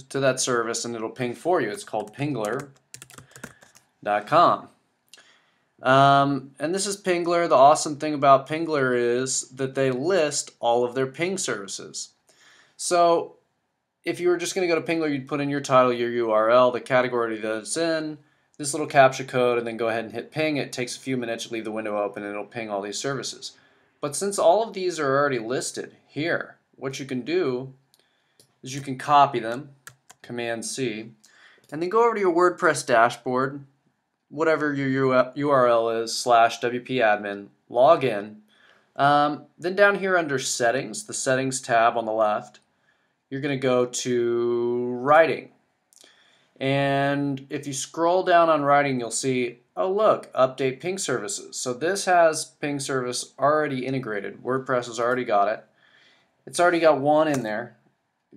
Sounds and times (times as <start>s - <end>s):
Speech: 0.0s - 2.7s, 4.0s - 4.8s, 5.8s - 12.2s, 12.8s - 13.4s, 14.1s - 27.8s, 28.6s - 33.7s, 34.4s - 38.4s, 39.0s - 42.6s, 43.3s - 45.6s, 46.6s - 55.6s, 56.5s - 57.8s.